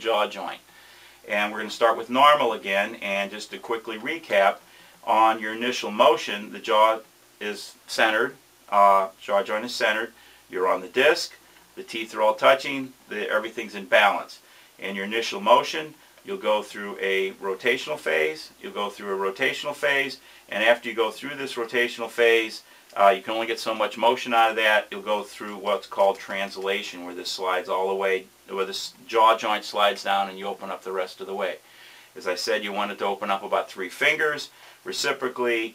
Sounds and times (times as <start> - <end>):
Speech: 0.0 - 31.6, 32.2 - 35.7.